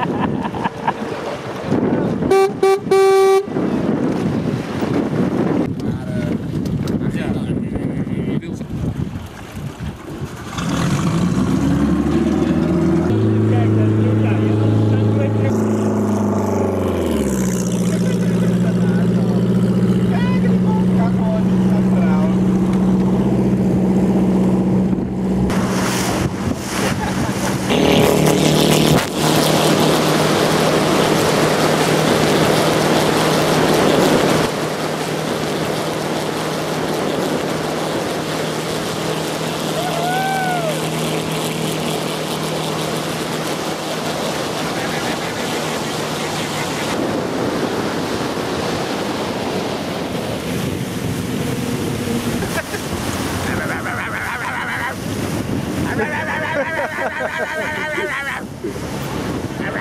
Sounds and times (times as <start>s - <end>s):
Motorboat, speedboat: 0.0s - 59.8s
Rowboat, canoe, kayak: 0.0s - 59.8s
Speech: 5.8s - 6.4s, 7.0s - 8.7s.